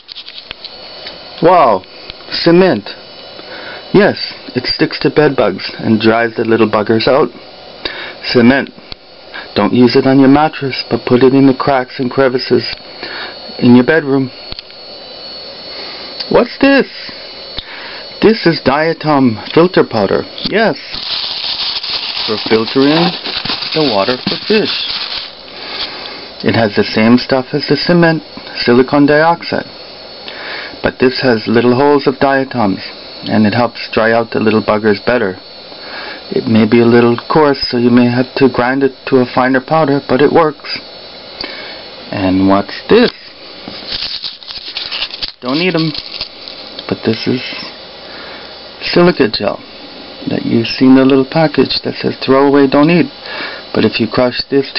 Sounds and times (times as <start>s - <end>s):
Speech: 1.4s - 3.0s, 3.9s - 7.4s, 8.2s - 8.8s, 9.6s - 12.8s, 13.5s - 14.4s, 16.2s - 17.1s, 18.2s - 21.0s, 22.2s - 24.9s, 26.4s - 29.7s, 30.8s - 35.4s, 36.3s - 40.8s, 42.1s - 43.4s, 45.4s - 46.0s, 46.8s - 47.8s, 48.8s - 49.6s, 50.2s - 54.7s.